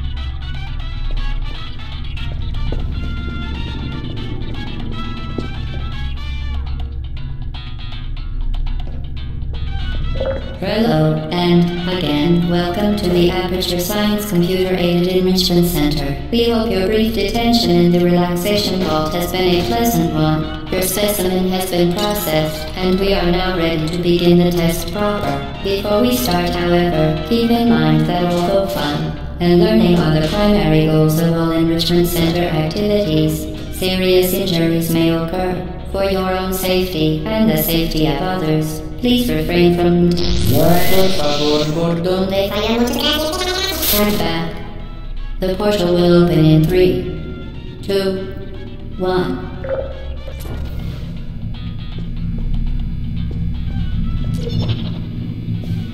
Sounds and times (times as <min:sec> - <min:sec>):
Music: 0:00.0 - 0:55.9
Speech: 0:10.6 - 0:44.7, 0:45.4 - 0:47.1, 0:47.9 - 0:48.3, 0:49.0 - 0:49.5.